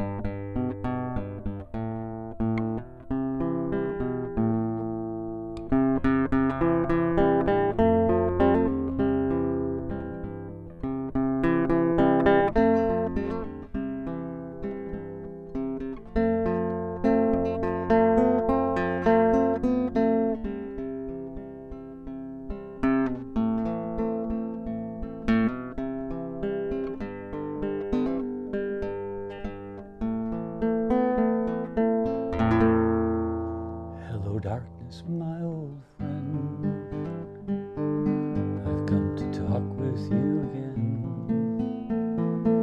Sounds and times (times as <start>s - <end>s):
Music: 0.0s - 42.6s.